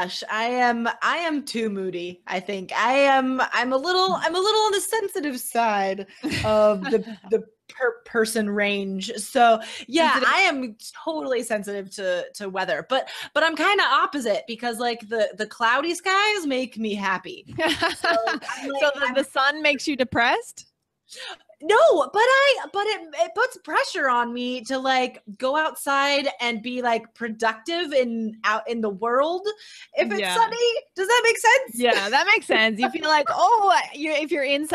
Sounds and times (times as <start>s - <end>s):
Speech: 0.0s - 20.6s, 21.2s - 34.7s.